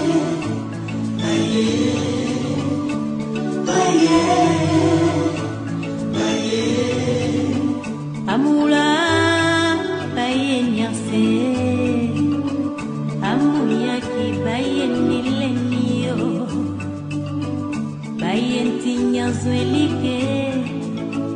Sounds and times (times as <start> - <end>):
Music: 0.0 - 21.3.